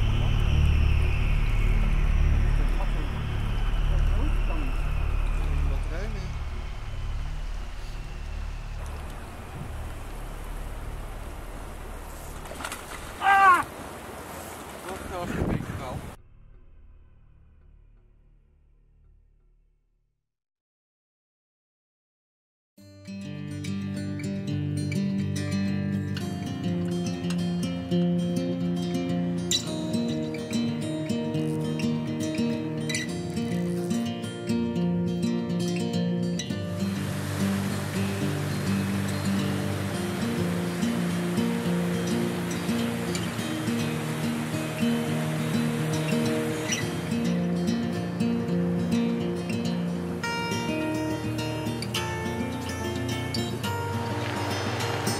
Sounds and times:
Stream: 0.0 - 16.2, 24.0 - 55.1
Speech: 5.7 - 6.3, 14.8 - 16.1.

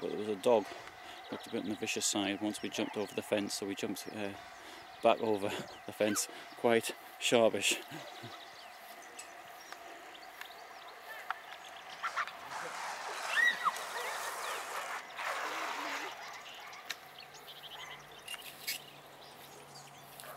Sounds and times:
Outside, rural or natural: 0.0 - 20.3.

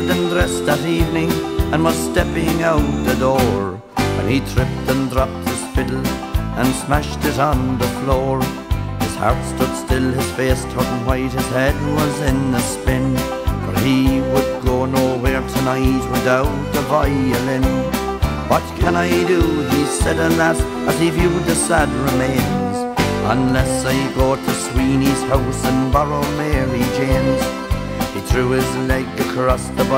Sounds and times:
Violin, fiddle: 0.0 - 29.9.

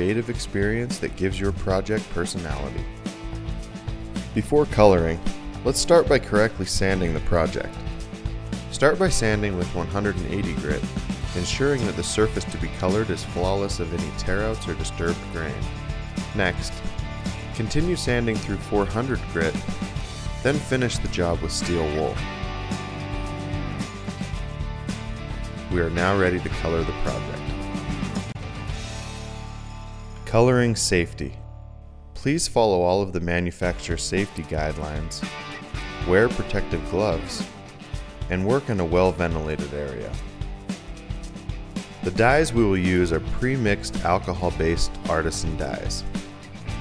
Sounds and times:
Speech: 0.0 - 2.9, 4.4 - 7.8, 8.7 - 15.7, 16.4 - 16.8, 17.6 - 19.6, 20.4 - 22.2, 25.7 - 27.5, 30.2 - 31.4, 32.2 - 35.3, 36.0 - 37.5, 38.3 - 40.2, 42.0 - 46.1
Music: 0.0 - 46.8.

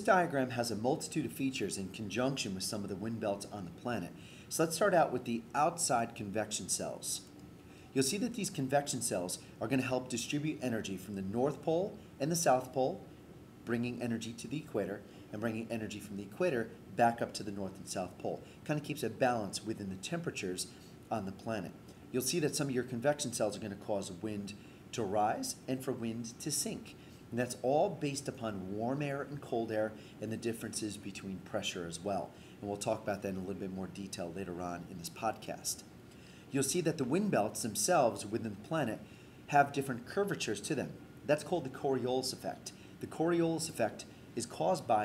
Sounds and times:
Speech: 0.0 - 7.3, 7.9 - 13.0, 13.6 - 35.9, 36.5 - 45.0.

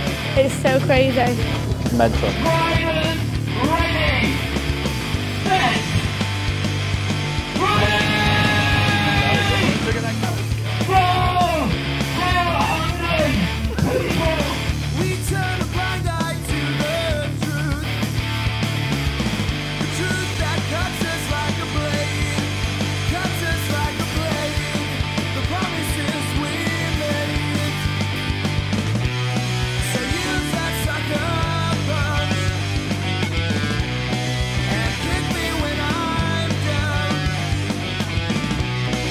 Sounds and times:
Music: 0.0 - 39.1.

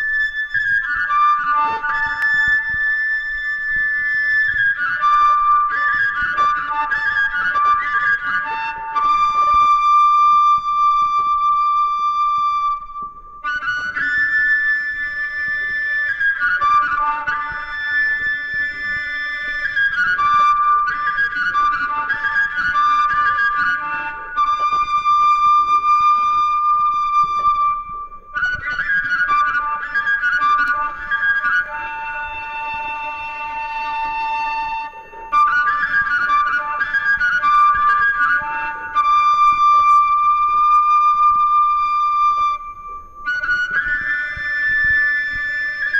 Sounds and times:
Flute: 0.0 - 45.9.

